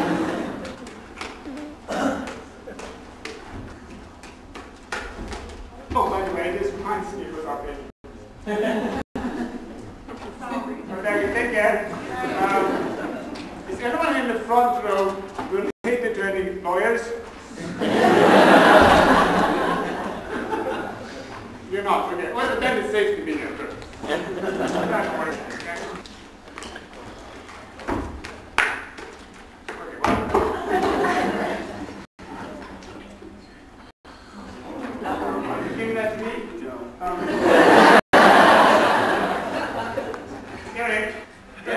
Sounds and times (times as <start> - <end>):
Speech: 5.8 - 7.9, 10.3 - 13.0, 13.7 - 17.3, 21.7 - 26.0, 34.6 - 37.3.